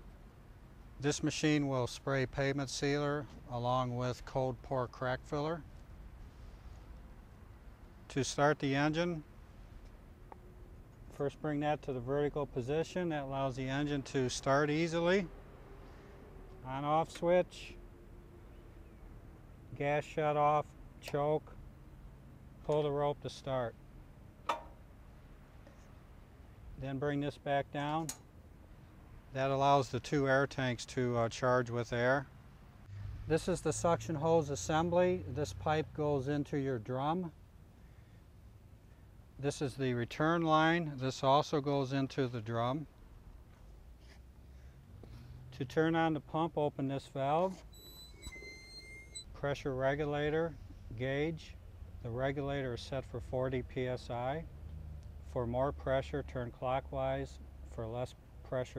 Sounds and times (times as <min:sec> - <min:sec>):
Speech: 0:01.0 - 0:05.6, 0:08.1 - 0:09.3, 0:11.1 - 0:15.3, 0:16.6 - 0:17.8, 0:19.7 - 0:21.6, 0:22.6 - 0:23.8, 0:26.8 - 0:28.2, 0:29.3 - 0:32.3, 0:33.3 - 0:37.4, 0:39.4 - 0:42.9, 0:45.6 - 0:47.6, 0:49.4 - 0:54.5, 0:55.3 - 0:58.7.